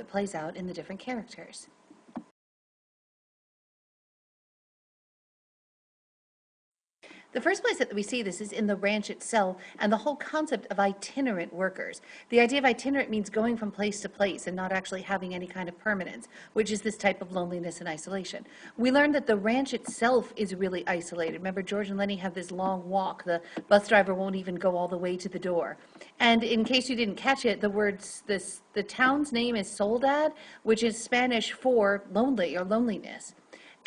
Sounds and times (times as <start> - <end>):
Speech: 0.0 - 1.8, 7.4 - 33.8.